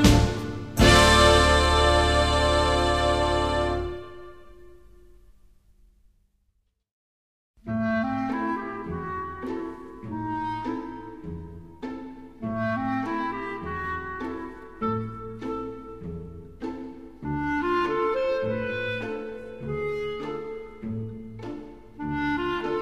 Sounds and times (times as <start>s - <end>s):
Music: 0.0s - 5.5s, 7.6s - 22.8s.